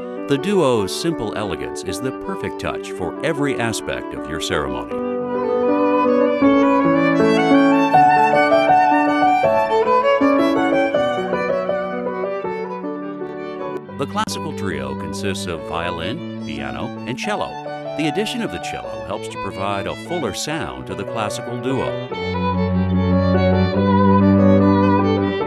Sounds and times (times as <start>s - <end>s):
Speech: 0.3s - 5.0s, 13.9s - 22.1s.